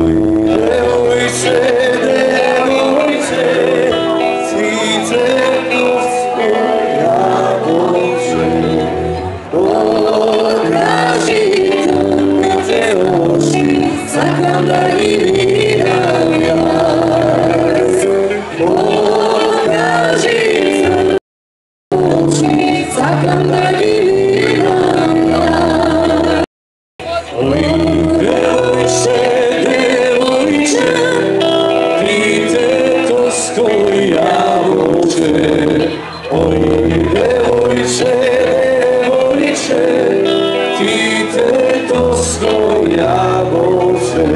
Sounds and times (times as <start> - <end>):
Male singing: 0.0 - 21.2, 21.9 - 44.3
Music: 0.0 - 21.2, 21.9 - 44.3
Female singing: 9.6 - 17.9, 22.0 - 26.4, 27.2 - 31.5.